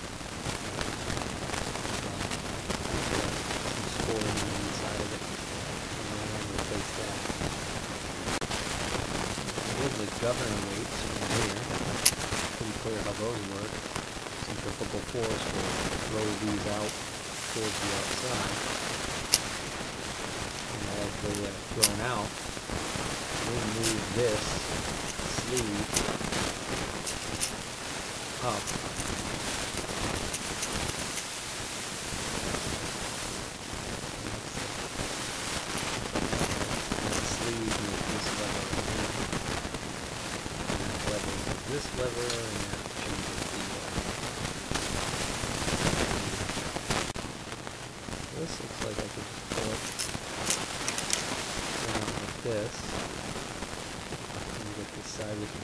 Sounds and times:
Speech: 3.9s - 7.4s, 9.6s - 11.7s, 12.6s - 13.8s, 14.4s - 18.6s, 20.7s - 22.3s, 23.4s - 26.0s, 28.4s - 28.9s, 34.1s - 34.8s, 37.1s - 39.3s, 40.8s - 44.0s, 48.3s - 50.0s, 51.8s - 53.0s, 54.6s - 55.6s.

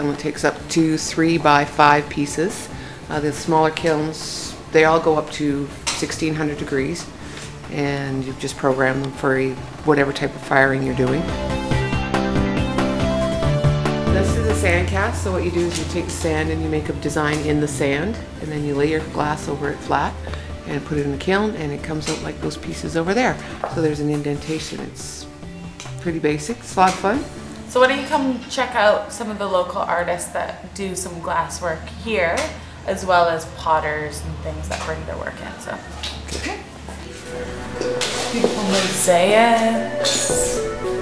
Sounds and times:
Music: 0.0s - 41.0s.

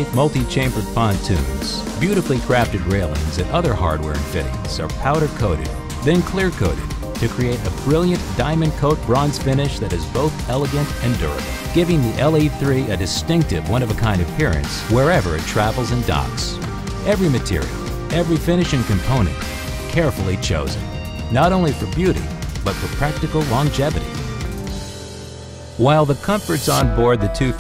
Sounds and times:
Speech: 0.0s - 24.8s, 25.8s - 27.6s
Music: 0.0s - 27.6s.

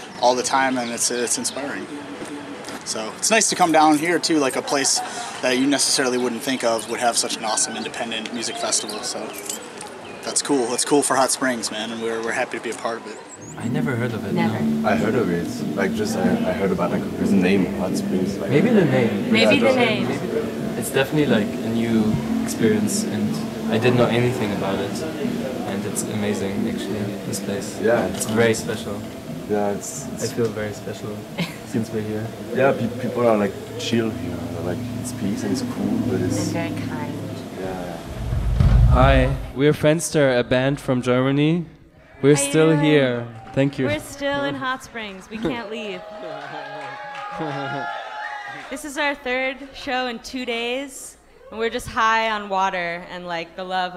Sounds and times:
Speech: 10.3s - 31.2s, 31.8s - 38.0s, 38.9s - 41.6s.

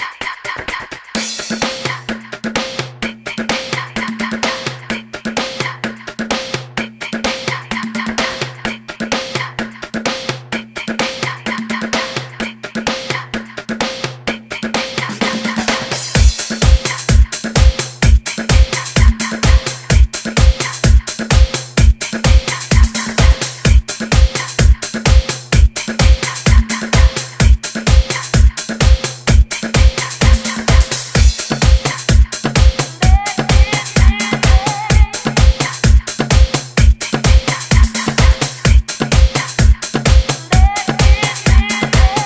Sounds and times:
Disco: 0.0s - 42.2s.

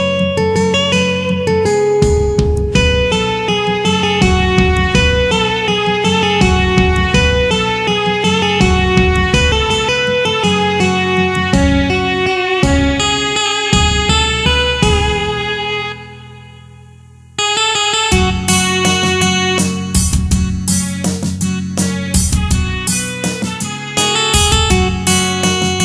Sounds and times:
Bass guitar: 0.0s - 17.4s, 18.1s - 25.8s
Electric guitar: 0.0s - 25.8s
Strum: 0.0s - 25.8s.

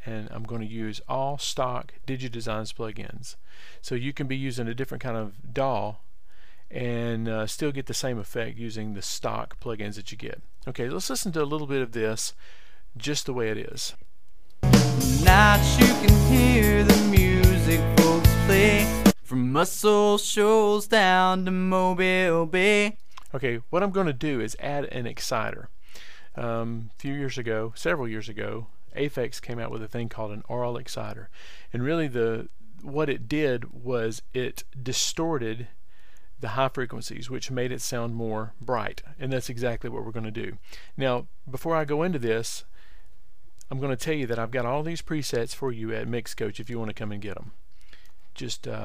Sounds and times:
Speech: 0.0s - 6.0s, 6.7s - 12.4s, 13.0s - 14.1s, 19.3s - 25.7s, 26.4s - 35.8s, 36.4s - 42.7s, 43.7s - 47.6s, 48.4s - 48.8s
Music: 14.6s - 19.2s.

